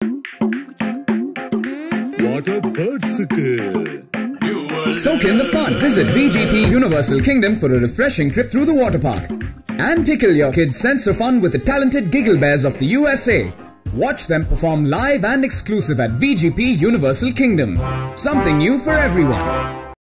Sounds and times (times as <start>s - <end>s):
Music: 0.0s - 20.0s
Speech: 2.2s - 19.5s.